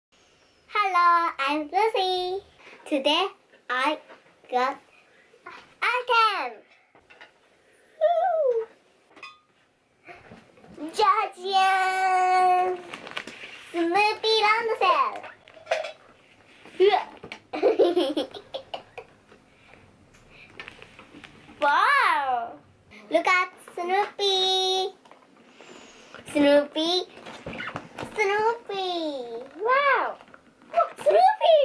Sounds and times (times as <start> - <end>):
Child speech, kid speaking: 0.7 - 4.8, 5.5 - 6.7, 10.8 - 12.9, 13.7 - 15.3, 16.8 - 17.2, 21.6 - 25.0, 26.3 - 27.1, 28.1 - 31.6.